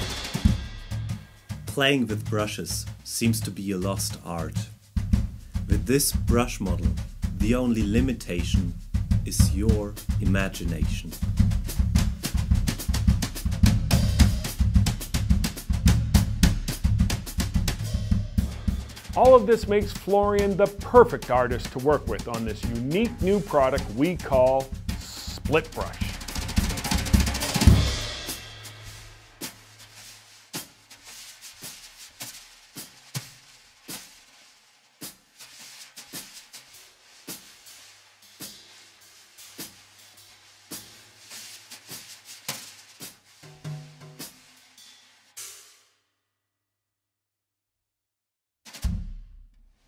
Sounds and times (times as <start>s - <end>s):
Rimshot: 0.0s - 1.9s, 9.3s - 29.7s, 48.7s - 49.4s
Bass drum: 0.0s - 30.0s, 48.8s - 49.8s
Drum kit: 0.0s - 45.9s, 48.7s - 49.8s
Drum roll: 0.0s - 45.9s, 48.7s - 49.5s
Hi-hat: 0.0s - 45.9s.